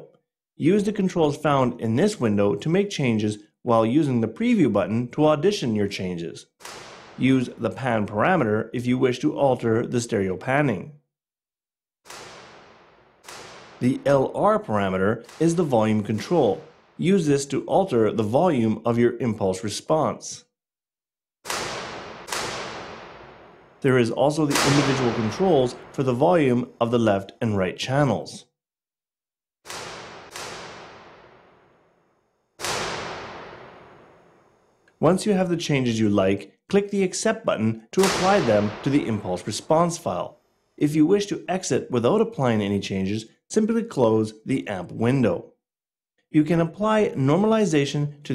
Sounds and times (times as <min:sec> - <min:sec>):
Speech: 0:00.0 - 0:06.5, 0:07.2 - 0:11.0, 0:13.8 - 0:20.5, 0:23.8 - 0:28.5, 0:35.0 - 0:45.6, 0:46.3 - 0:48.3.